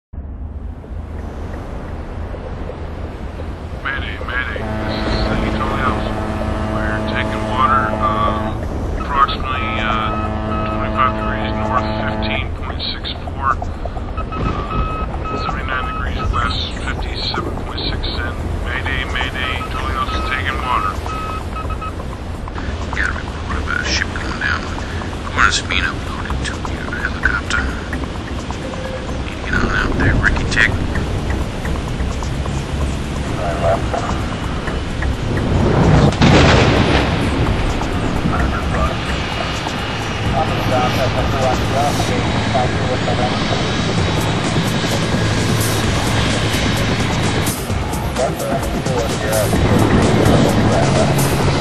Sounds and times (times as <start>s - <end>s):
Outside, rural or natural: 0.1s - 51.6s
Ship: 0.2s - 51.6s
Speech: 3.8s - 13.7s, 14.5s - 21.1s, 22.6s - 27.9s, 29.3s - 30.9s, 33.4s - 34.2s, 38.3s - 39.5s, 40.2s - 43.8s, 48.1s - 51.6s.